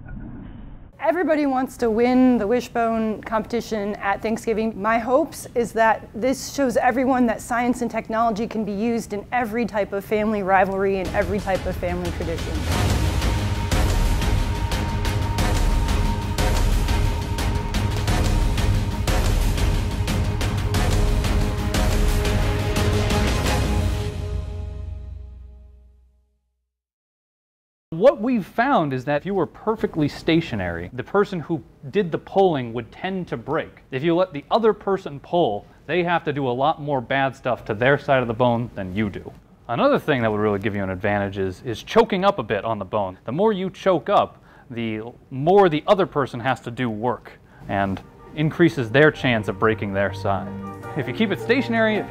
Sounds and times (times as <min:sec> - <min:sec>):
Speech: 0:28.0 - 0:52.1.